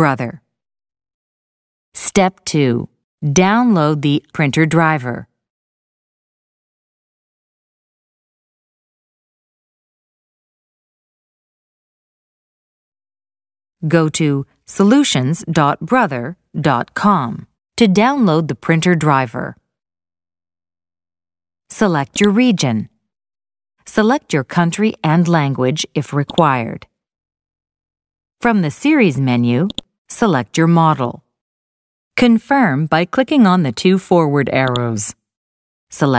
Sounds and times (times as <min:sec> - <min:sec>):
Speech: 0:00.0 - 0:00.4, 0:02.0 - 0:05.3, 0:13.8 - 0:19.6, 0:21.7 - 0:22.9, 0:23.9 - 0:26.9, 0:28.4 - 0:31.2, 0:32.2 - 0:35.2, 0:35.9 - 0:36.1.